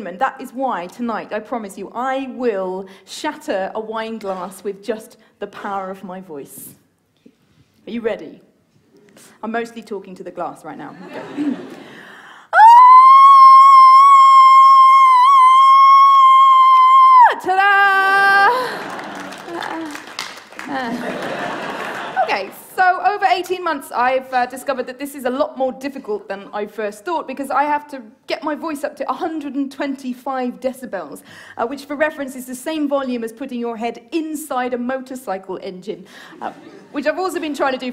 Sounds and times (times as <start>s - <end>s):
Speech: 0.0s - 6.8s, 7.8s - 8.5s, 9.4s - 11.0s, 22.2s - 37.9s.